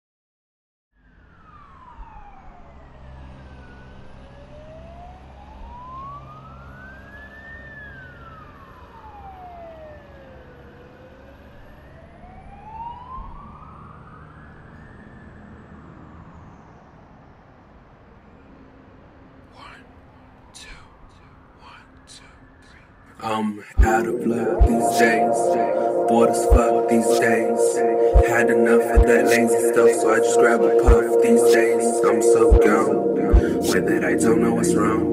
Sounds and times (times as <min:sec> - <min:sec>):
Police car (siren): 0:01.0 - 0:18.0, 0:23.8 - 0:35.1.